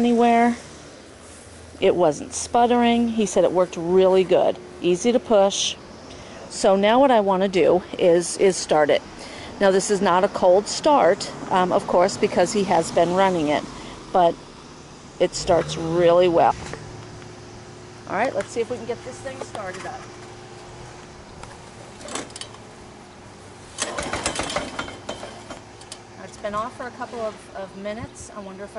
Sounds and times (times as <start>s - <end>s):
Speech: 1.8s - 5.8s, 18.1s - 20.0s, 26.2s - 28.7s
Lawn mower: 15.4s - 21.0s, 23.4s - 26.0s.